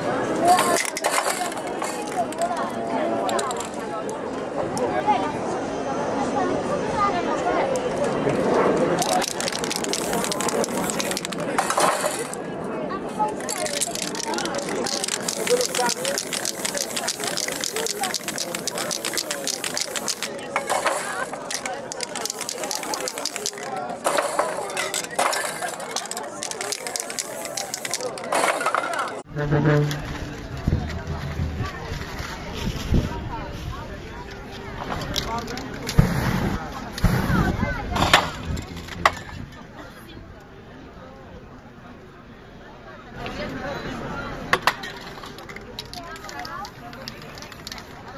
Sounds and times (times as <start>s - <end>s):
Speech: 0.0s - 48.1s.